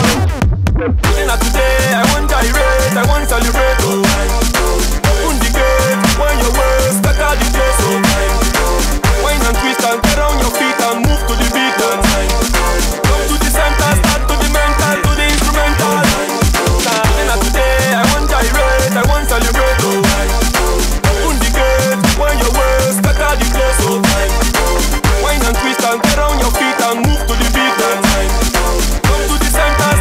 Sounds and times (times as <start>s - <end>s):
Dubstep: 0.0s - 30.0s.